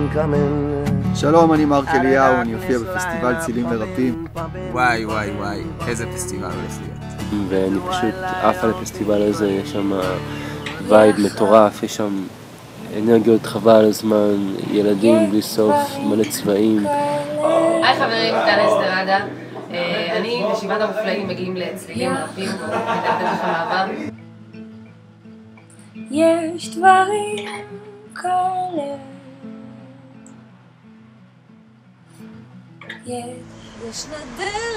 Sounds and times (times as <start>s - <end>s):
Music: 0.0s - 34.7s
Speech: 1.2s - 4.2s, 4.8s - 10.2s, 10.8s - 12.3s, 12.9s - 22.7s.